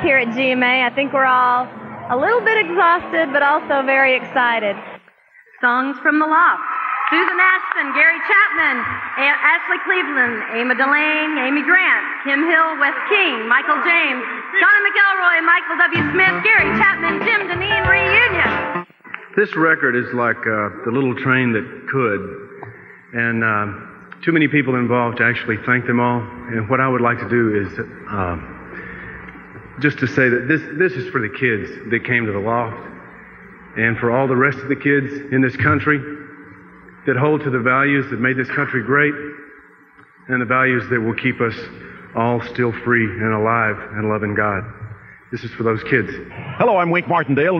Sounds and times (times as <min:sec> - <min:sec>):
Speech: 0:19.4 - 0:22.4, 0:23.2 - 0:28.5, 0:29.8 - 0:33.0, 0:33.8 - 0:36.1, 0:37.1 - 0:39.3, 0:40.3 - 0:47.5.